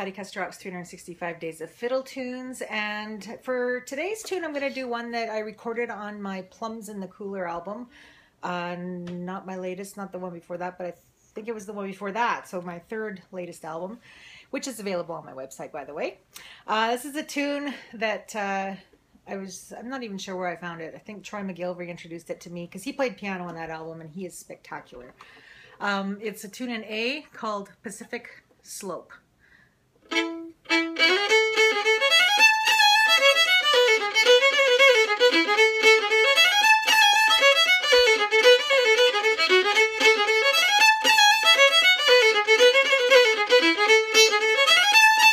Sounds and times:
Speech: 0.0s - 14.0s, 14.6s - 25.2s, 25.8s - 29.3s
Violin, fiddle: 30.0s - 45.3s.

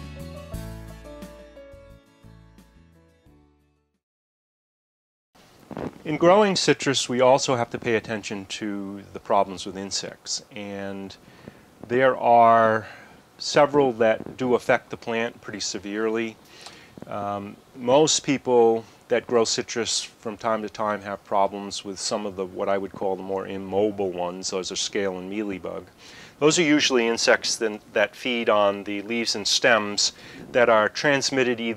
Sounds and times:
Speech: 6.1s - 11.2s, 11.9s - 16.4s, 17.1s - 31.7s.

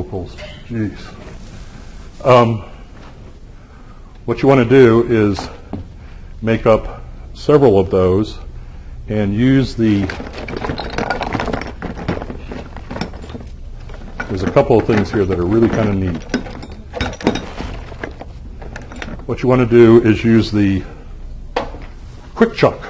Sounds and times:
Speech: 0.0s - 1.2s, 2.2s - 2.8s, 4.3s - 5.6s, 6.4s - 8.5s, 9.1s - 10.2s, 14.3s - 16.3s, 19.3s - 21.0s, 22.4s - 22.8s.

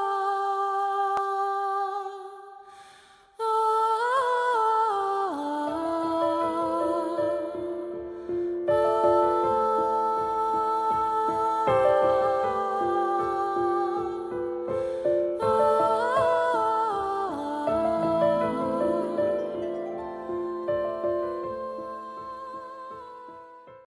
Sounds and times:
Music: 0.0s - 23.9s.

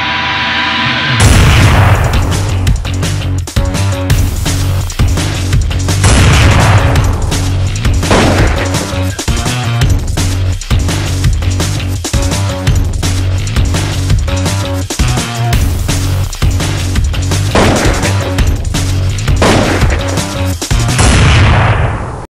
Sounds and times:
Music: 0.0s - 21.6s.

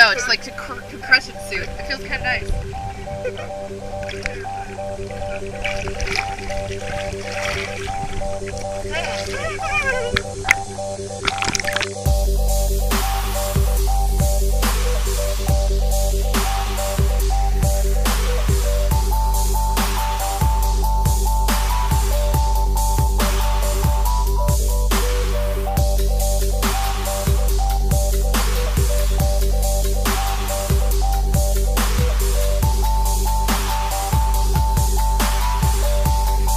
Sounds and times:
Speech: 0.0s - 2.5s, 8.9s - 10.3s
Music: 0.0s - 36.5s.

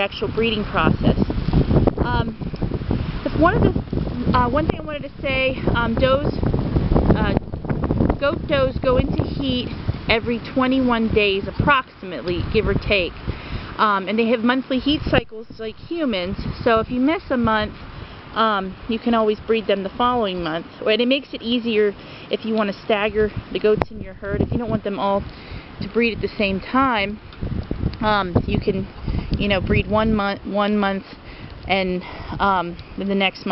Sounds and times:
Speech: 0.0s - 1.3s, 2.0s - 2.4s, 3.2s - 6.4s, 7.2s - 7.4s, 8.2s - 13.2s, 13.8s - 17.7s, 18.4s - 27.2s, 28.0s - 33.5s.

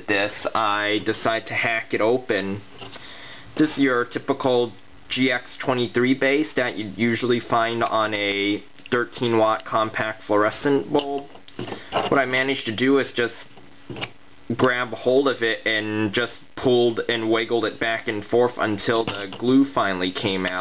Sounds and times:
Speech: 0.0s - 2.6s, 3.6s - 11.3s, 12.0s - 13.5s, 14.5s - 20.6s.

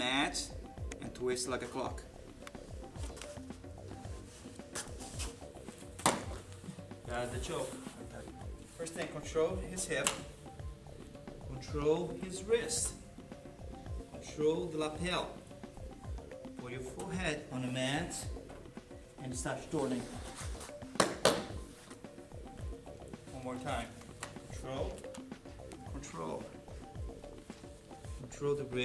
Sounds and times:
Music: 0.0s - 28.8s.

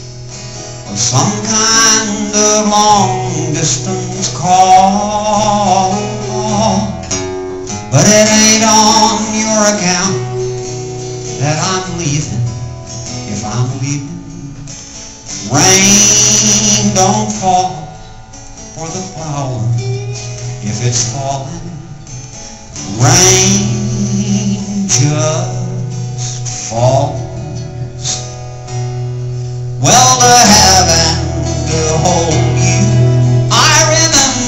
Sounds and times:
Music: 0.0s - 34.4s.

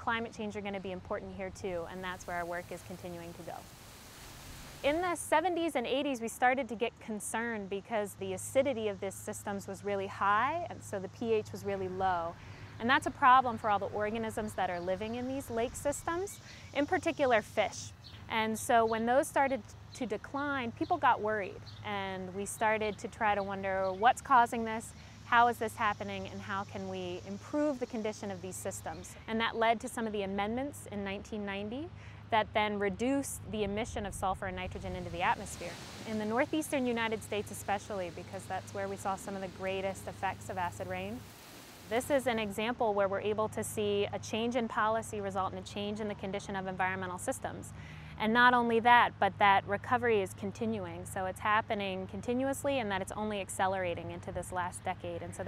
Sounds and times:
Speech: 0.0s - 3.6s, 4.8s - 41.2s, 41.9s - 55.4s.

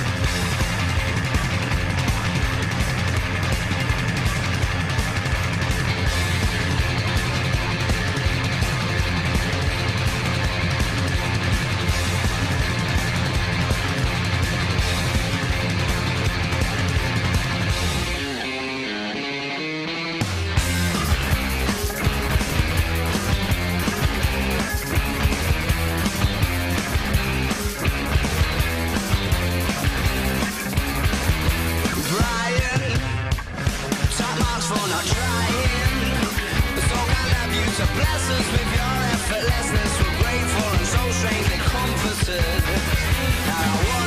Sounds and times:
Electric guitar: 0.0s - 44.0s.

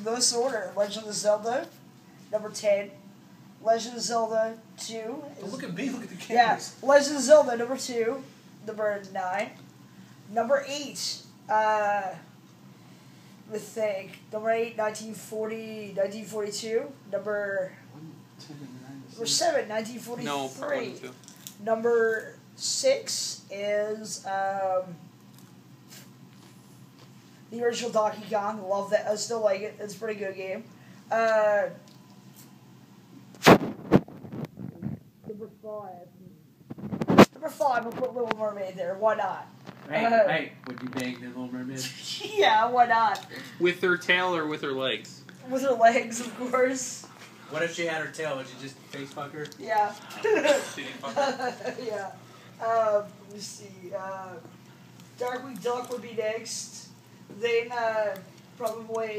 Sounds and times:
Inside, small room: 0.0s - 59.1s.

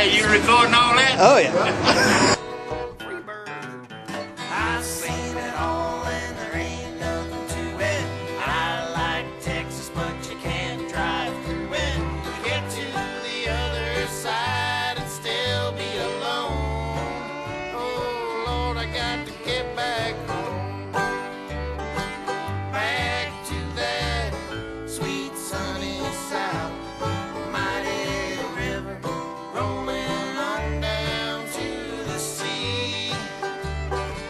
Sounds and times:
Bluegrass: 0.0s - 1.0s, 2.4s - 34.2s
Banjo: 2.3s - 34.2s.

